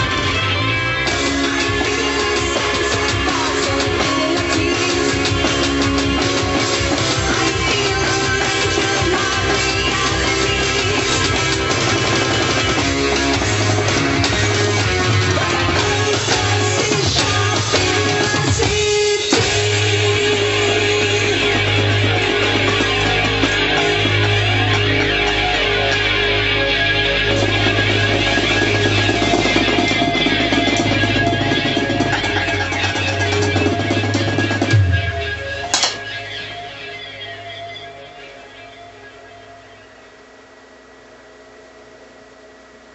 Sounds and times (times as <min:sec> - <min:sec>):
Music: 0:00.0 - 0:40.2.